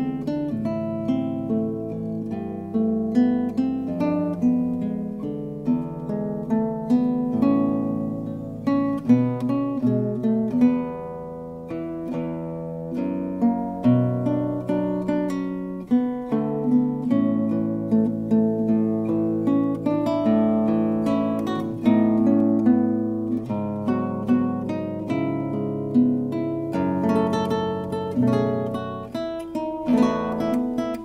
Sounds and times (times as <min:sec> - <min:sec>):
Strum: 0:00.0 - 0:31.0.